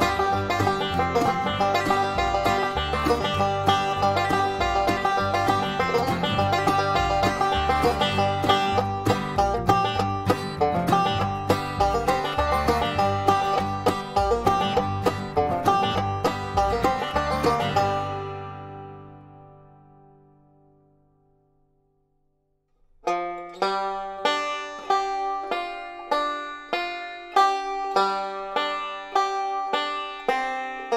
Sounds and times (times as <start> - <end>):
Music: 0.0 - 22.2, 23.0 - 30.9.